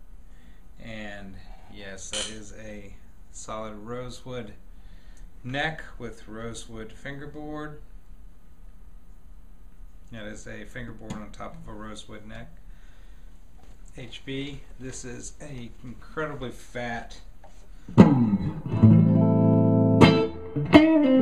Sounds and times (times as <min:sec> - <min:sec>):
Speech: 0:00.8 - 0:04.6, 0:05.4 - 0:07.9, 0:10.1 - 0:12.6, 0:13.9 - 0:17.3.